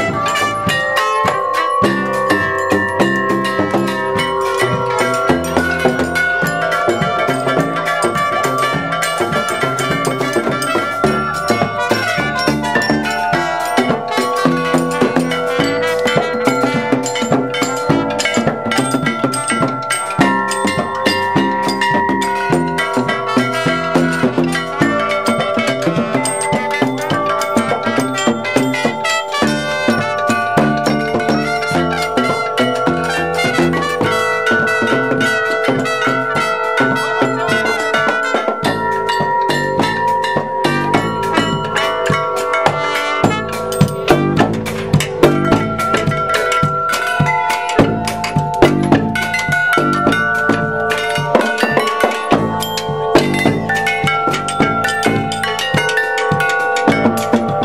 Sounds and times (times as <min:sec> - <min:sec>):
Percussion: 0:00.0 - 0:57.6.